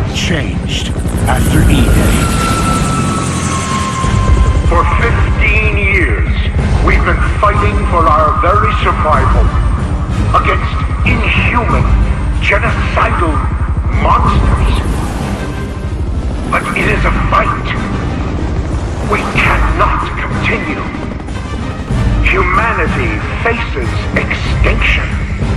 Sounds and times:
Male speech, man speaking: 0:00.0 - 0:02.3, 0:04.7 - 0:09.6, 0:10.3 - 0:14.9, 0:16.5 - 0:17.9, 0:19.1 - 0:21.0, 0:22.2 - 0:25.3
Music: 0:00.0 - 0:25.5.

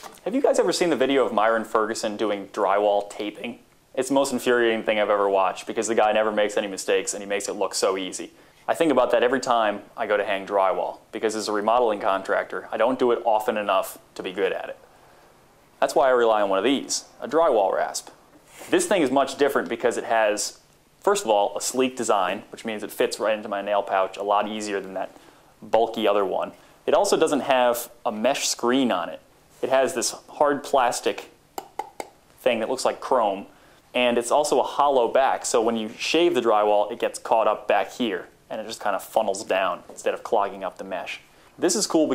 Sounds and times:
Speech: 0:00.2 - 0:14.8, 0:15.8 - 0:31.4, 0:32.4 - 0:42.1.

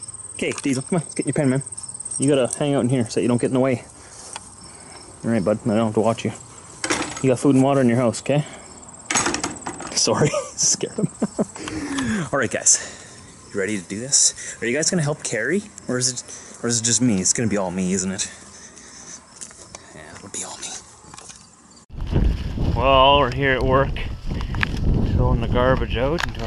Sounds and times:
Speech: 0:00.4 - 0:03.9, 0:05.2 - 0:06.4, 0:07.2 - 0:08.6, 0:12.2 - 0:12.8, 0:13.5 - 0:18.3, 0:19.9 - 0:20.8, 0:22.8 - 0:24.1, 0:25.1 - 0:26.4.

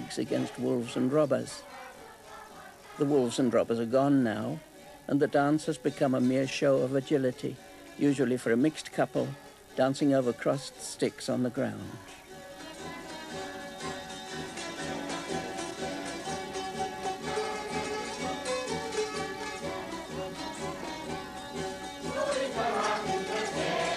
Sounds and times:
Speech: 0:00.0 - 0:01.7, 0:03.0 - 0:12.2
Folk music: 0:00.0 - 0:23.9.

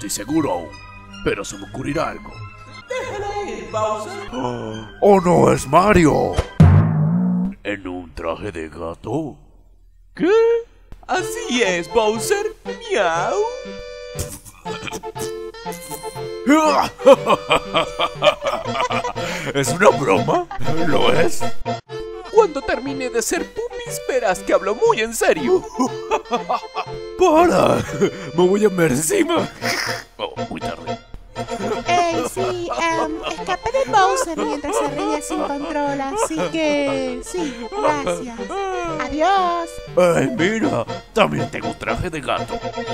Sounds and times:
Music: 0:00.0 - 0:07.7, 0:09.7 - 0:42.9.

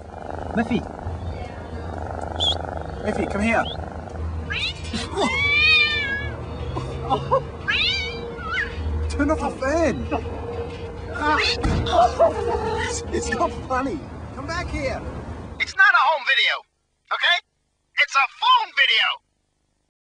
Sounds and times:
Speech: 0:18.0 - 0:19.2.

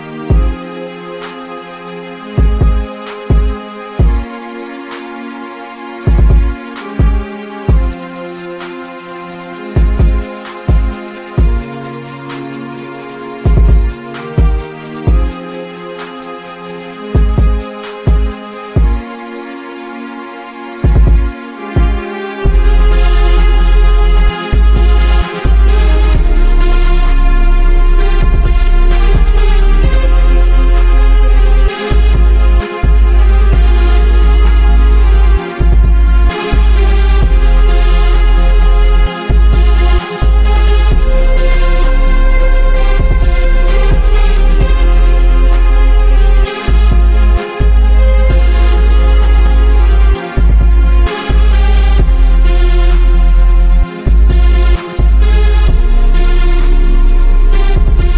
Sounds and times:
Music: 0:00.0 - 0:58.1.

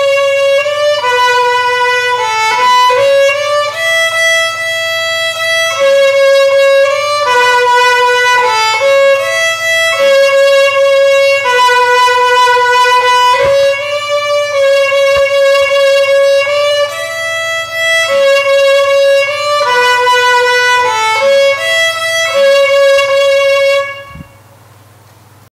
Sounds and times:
Violin, fiddle: 0:00.0 - 0:24.4.

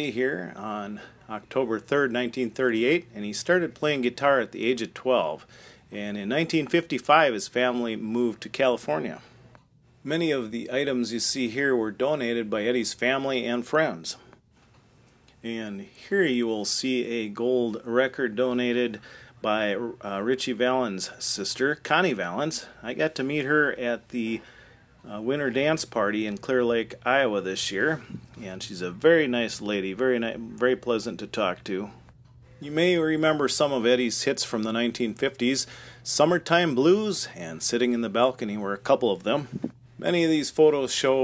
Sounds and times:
Speech: 0:00.0 - 0:09.3, 0:10.0 - 0:14.3, 0:15.4 - 0:24.4, 0:25.0 - 0:32.0, 0:32.6 - 0:41.2.

